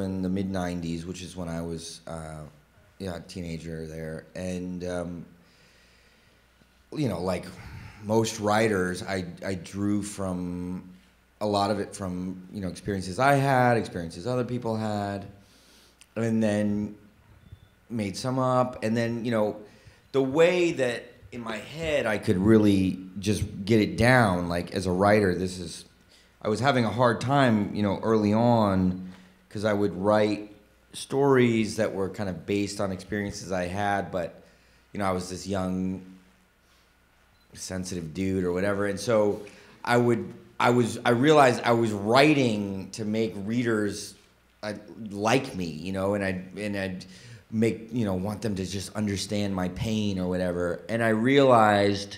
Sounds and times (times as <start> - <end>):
Speech: 0.0 - 5.4, 6.9 - 15.4, 16.2 - 17.0, 17.9 - 34.4, 35.0 - 36.2, 37.5 - 52.1.